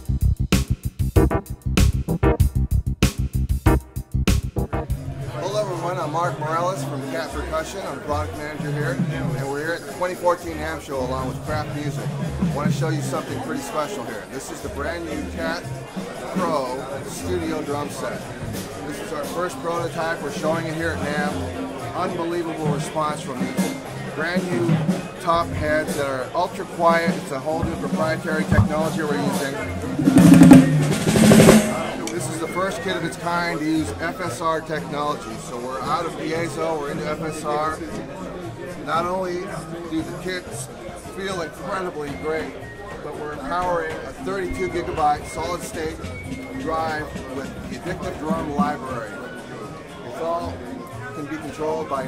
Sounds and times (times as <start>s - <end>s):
Percussion: 0.0s - 5.4s, 8.1s - 34.1s, 43.4s - 49.8s
Speech: 5.2s - 30.0s, 31.7s - 52.0s.